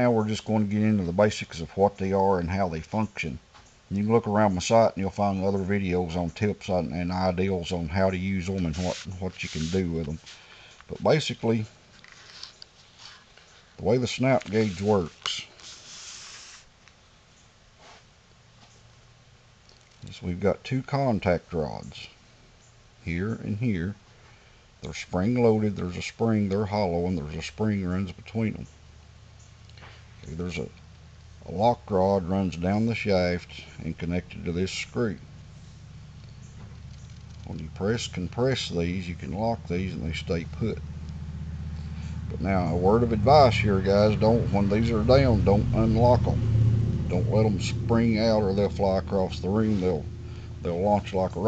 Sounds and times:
Speech: 0:00.0 - 0:10.3, 0:10.9 - 0:11.7, 0:13.8 - 0:15.6, 0:20.0 - 0:22.2, 0:23.0 - 0:24.0, 0:24.8 - 0:28.7, 0:30.2 - 0:30.8, 0:31.4 - 0:35.2, 0:37.4 - 0:40.8, 0:42.3 - 0:46.4, 0:47.1 - 0:50.0, 0:50.6 - 0:51.4.

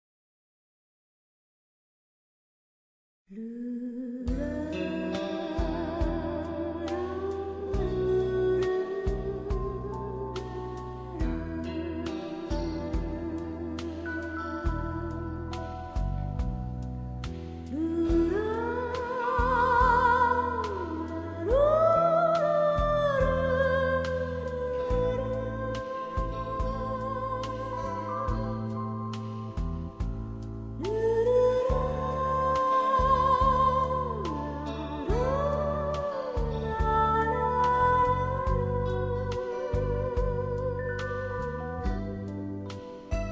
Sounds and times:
New-age music: 0:03.7 - 0:43.3.

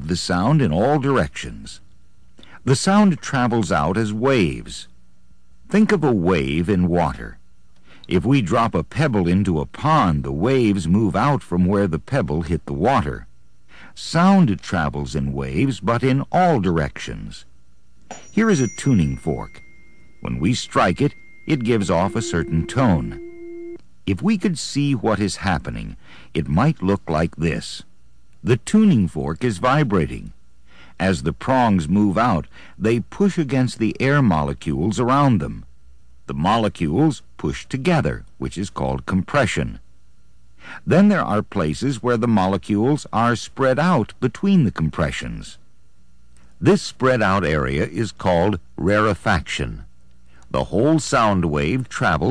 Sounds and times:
Speech: 0:00.0 - 0:01.9, 0:02.6 - 0:05.0, 0:05.7 - 0:07.4, 0:08.1 - 0:13.3, 0:13.9 - 0:17.5, 0:18.2 - 0:19.6, 0:20.2 - 0:23.2, 0:24.1 - 0:30.4, 0:31.0 - 0:35.7, 0:36.3 - 0:39.9, 0:40.8 - 0:45.6, 0:46.6 - 0:52.3.

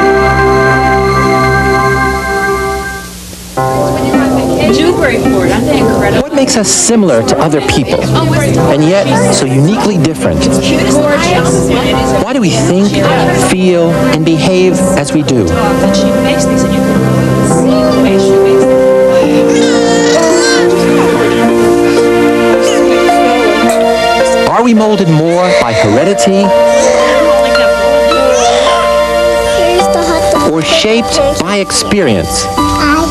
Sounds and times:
Music: 0:00.0 - 0:33.1
Speech: 0:04.0 - 0:16.8.

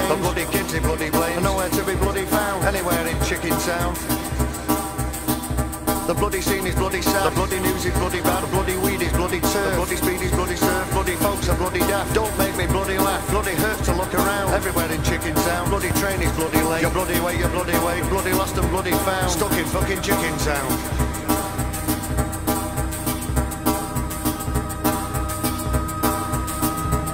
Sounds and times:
Swing music: 0:00.0 - 0:27.1.

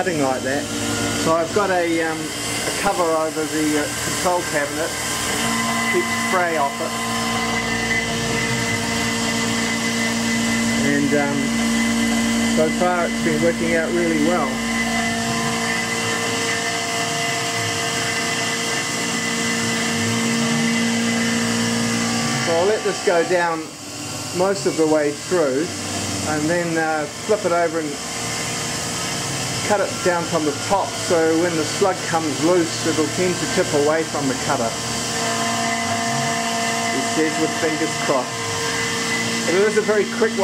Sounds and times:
Speech: 0:00.0 - 0:05.0, 0:06.0 - 0:06.9, 0:10.8 - 0:11.5, 0:12.6 - 0:14.6, 0:22.5 - 0:23.7, 0:24.4 - 0:25.7, 0:26.3 - 0:28.0, 0:29.7 - 0:34.8, 0:37.0 - 0:38.3, 0:39.5 - 0:40.4.

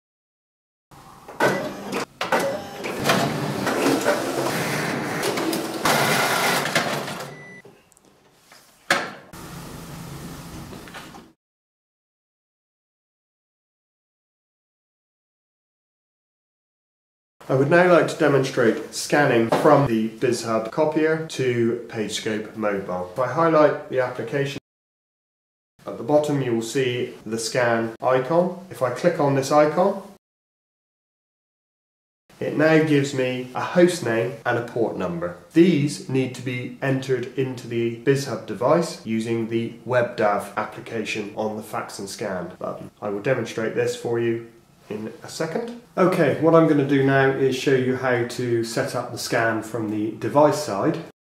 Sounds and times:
Printer: 0:01.3 - 0:07.4.

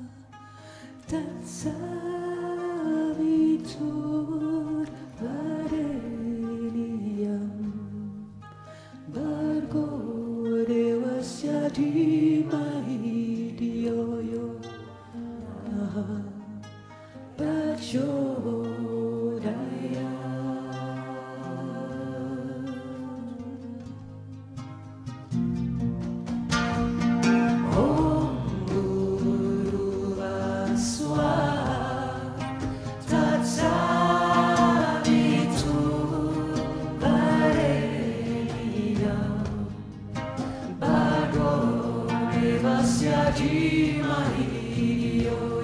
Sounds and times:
Mantra: 0:01.1 - 0:08.2, 0:09.1 - 0:16.6, 0:17.4 - 0:24.2, 0:27.6 - 0:40.0, 0:40.6 - 0:45.6.

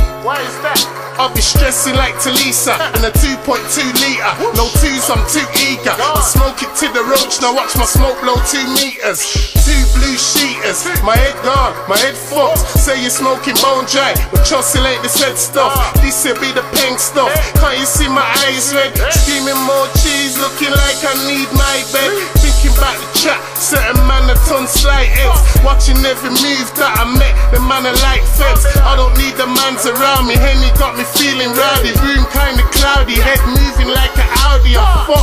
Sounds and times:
Music: 0:00.0 - 0:35.2.

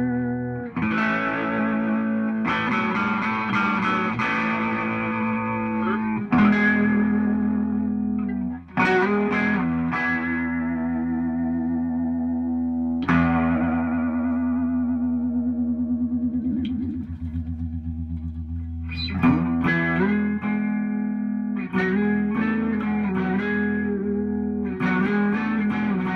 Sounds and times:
Effects unit: 0:00.0 - 0:26.1
Electric guitar: 0:00.0 - 0:26.1
Inside, small room: 0:00.0 - 0:26.1.

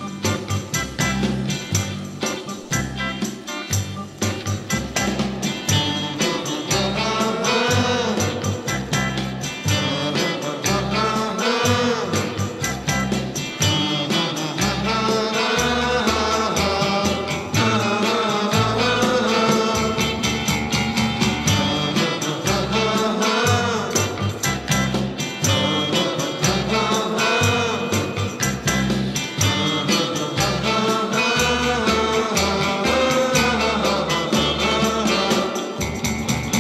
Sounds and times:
Music: 0:00.0 - 0:36.6.

